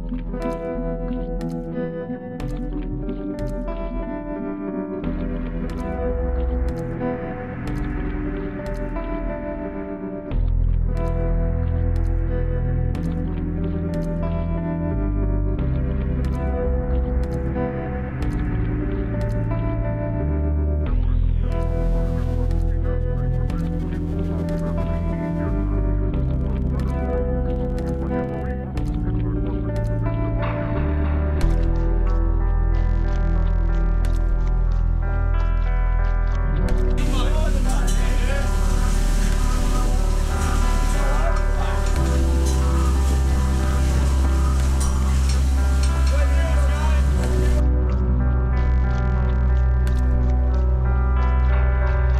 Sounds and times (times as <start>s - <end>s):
Music: 0.0s - 52.1s.